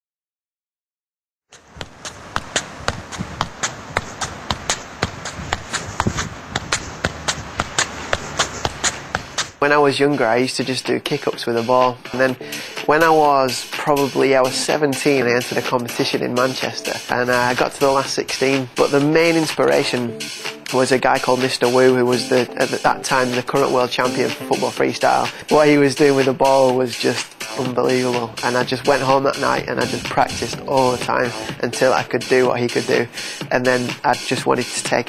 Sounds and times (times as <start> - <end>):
Speech: 9.6 - 35.0
Music: 9.7 - 35.0.